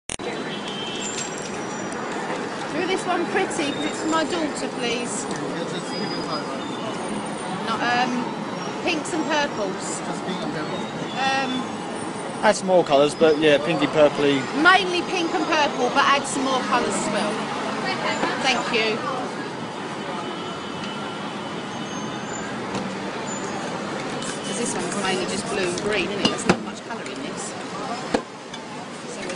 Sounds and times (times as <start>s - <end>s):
Hubbub, speech noise, speech babble: 0.1s - 29.3s.